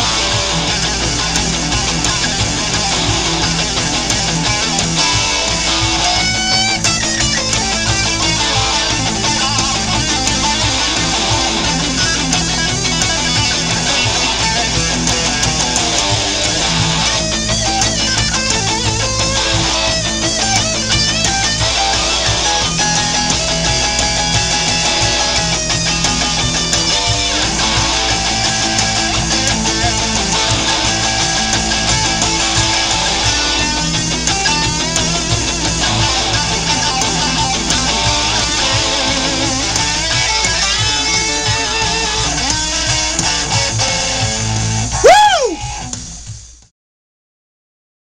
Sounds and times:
Guitar: 0.0 - 46.7
Inside, small room: 0.0 - 46.7.

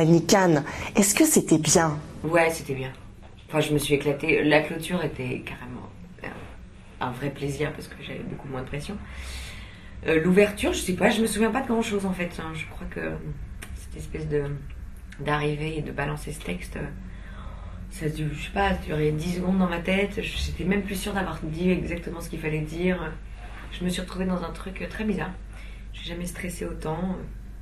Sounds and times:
Speech: 0.0 - 9.1, 10.0 - 17.0, 17.9 - 25.4, 26.0 - 27.4.

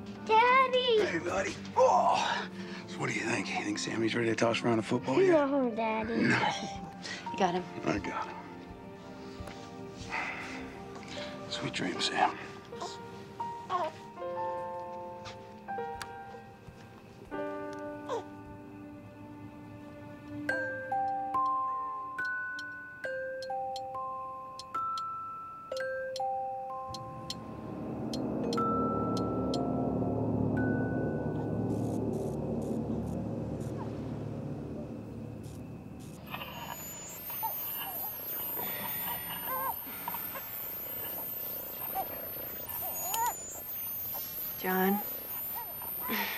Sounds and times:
Music: 0.0 - 46.3.

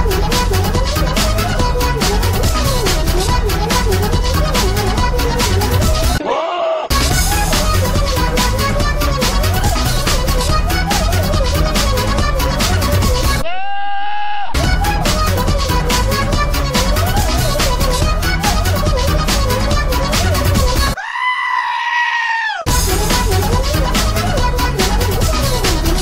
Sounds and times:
Music: 0.0 - 6.2, 6.9 - 13.4, 14.6 - 21.0, 22.7 - 26.0.

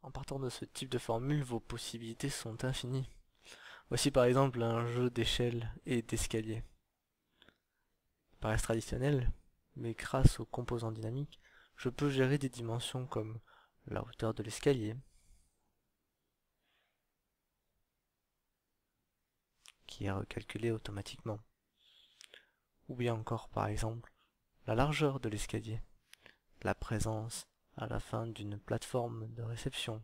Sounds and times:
Speech: 0.0 - 3.2, 3.9 - 6.8, 8.4 - 15.1, 19.7 - 21.5, 22.9 - 25.9, 26.6 - 30.0
Inside, small room: 0.0 - 30.0.

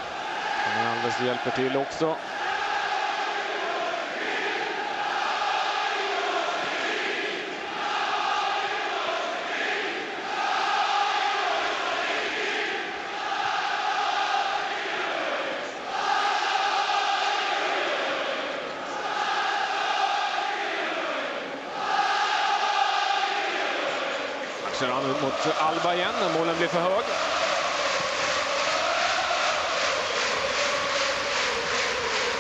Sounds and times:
Choir: 0.0 - 32.4.

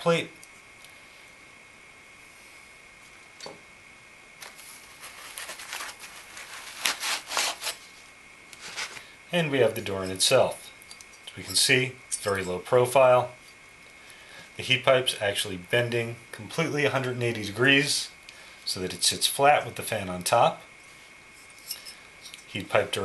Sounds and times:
Speech: 0.0 - 0.4, 9.3 - 10.7, 11.3 - 13.4, 14.6 - 20.6, 22.5 - 23.0
Inside, small room: 0.0 - 23.0.

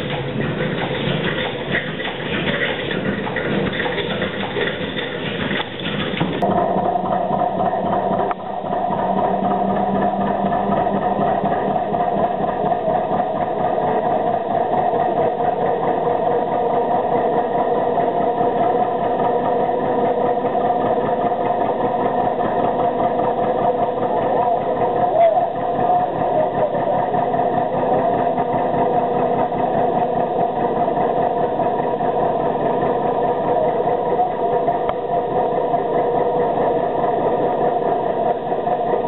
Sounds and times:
Engine: 0.0 - 39.0.

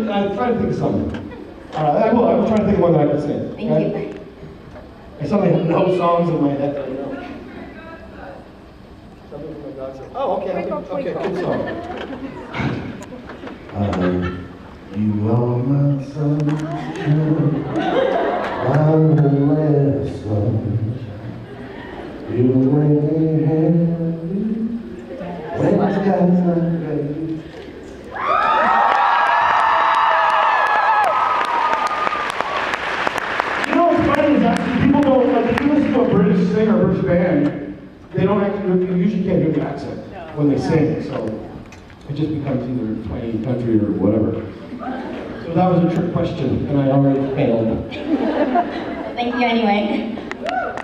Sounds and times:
Male singing: 15.0 - 17.4, 22.3 - 24.9, 25.6 - 27.4.

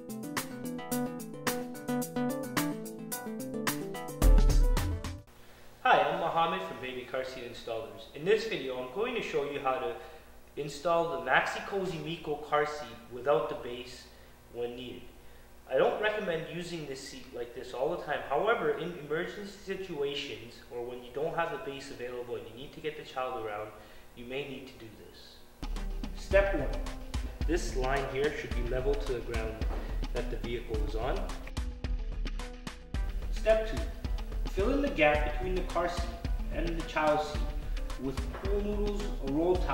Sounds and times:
Speech: 5.8 - 15.1, 15.7 - 25.4, 26.2 - 26.9, 27.5 - 31.4, 33.3 - 33.9, 34.5 - 39.7.

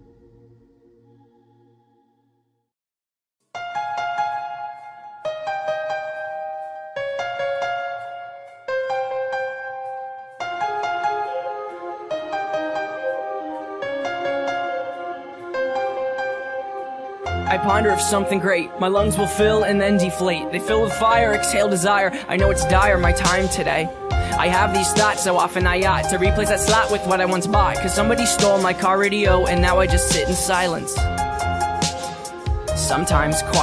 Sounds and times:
Music: 0.0 - 2.7, 3.4 - 33.6
Speech: 17.5 - 31.0, 32.8 - 33.6.

